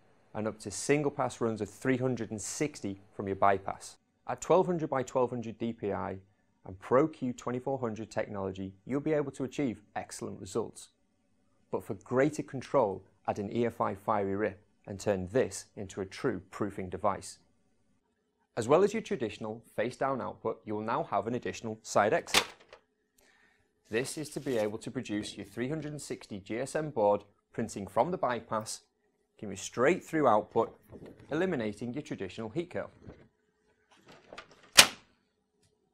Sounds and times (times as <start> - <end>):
Speech: 0.3 - 11.0, 11.7 - 17.5, 18.6 - 22.5, 23.9 - 33.2.